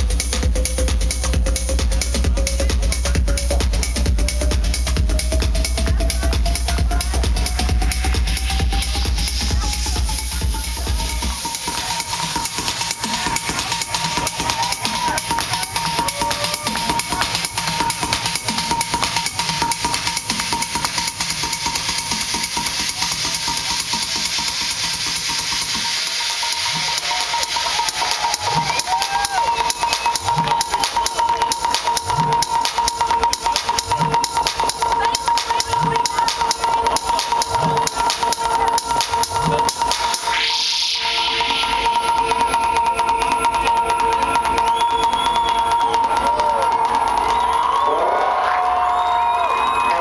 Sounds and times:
Disco: 0.0 - 50.0.

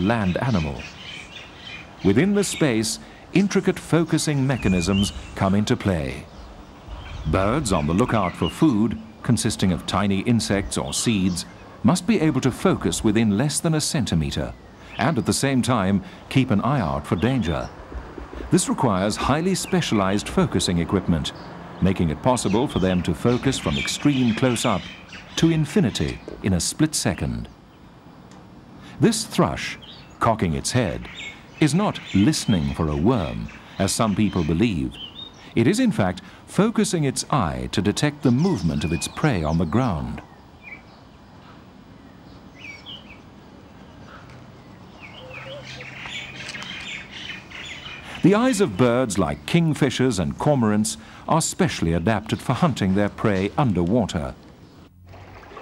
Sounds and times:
Speech: 0.0 - 0.9, 2.0 - 6.3, 7.3 - 17.7, 18.5 - 27.5, 29.0 - 35.0, 35.6 - 40.2, 48.1 - 54.4
Bird: 0.0 - 27.8, 28.8 - 54.9.

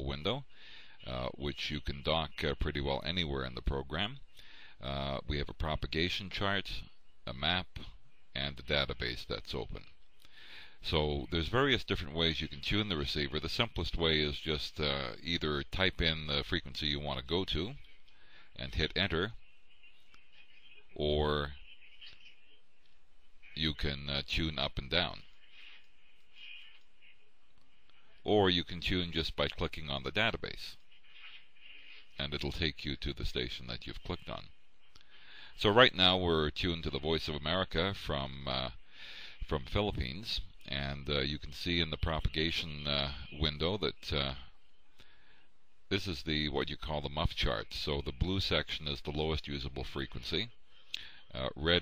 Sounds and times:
Speech: 0.0 - 10.0, 10.8 - 17.9, 18.6 - 19.4, 20.6 - 22.5, 23.5 - 25.3, 28.2 - 30.9, 32.1 - 34.6, 35.6 - 38.8, 39.4 - 44.6, 45.9 - 50.6, 51.3 - 51.8.

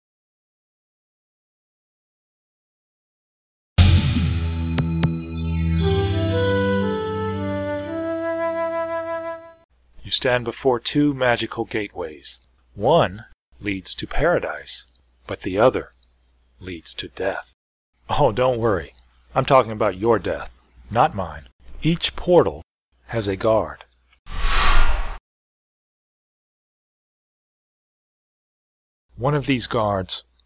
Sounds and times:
Flute: 5.4 - 9.6.

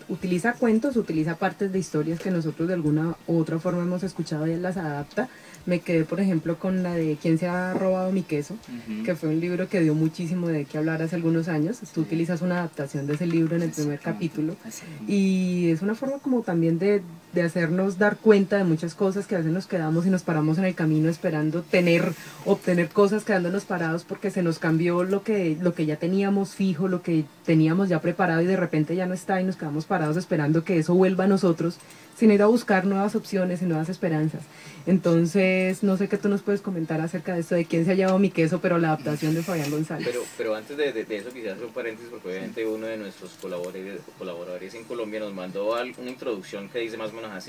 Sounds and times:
Speech: 0.1 - 47.4.

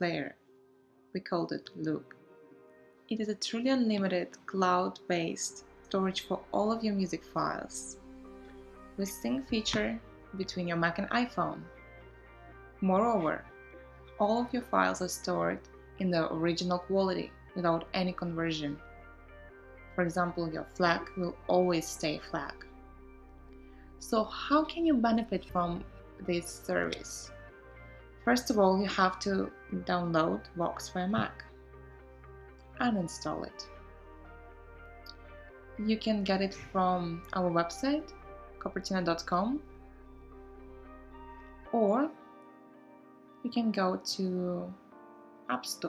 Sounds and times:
Speech: 0.0 - 0.3, 1.2 - 2.0, 3.1 - 7.9, 9.0 - 11.6, 12.8 - 13.4, 14.2 - 18.8, 20.0 - 22.6, 24.0 - 27.3, 28.3 - 31.5, 32.8 - 33.6, 35.8 - 39.6, 41.7 - 42.1, 43.4 - 44.8, 45.5 - 45.8
Music: 0.0 - 45.8.

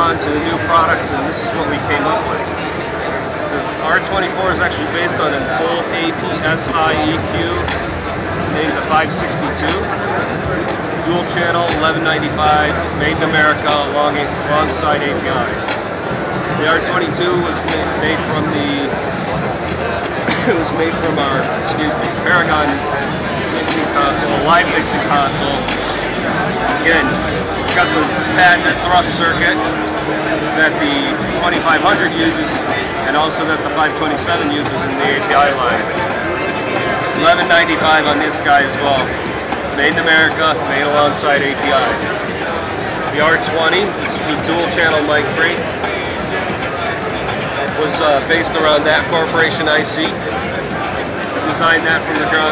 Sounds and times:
Speech: 0.0 - 15.6, 16.5 - 36.0, 37.0 - 45.7, 47.6 - 50.5, 51.3 - 52.5
Musical instrument: 14.4 - 33.2.

